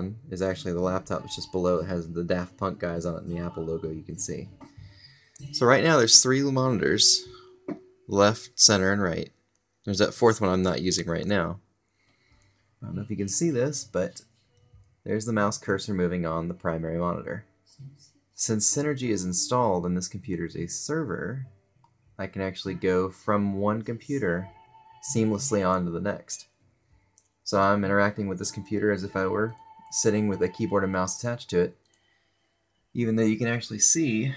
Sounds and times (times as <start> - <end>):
Speech: 0.0 - 4.7, 5.4 - 7.4, 8.1 - 9.3, 9.9 - 11.6, 12.8 - 14.2, 15.1 - 21.5, 22.2 - 26.5, 27.5 - 31.8, 33.0 - 34.3.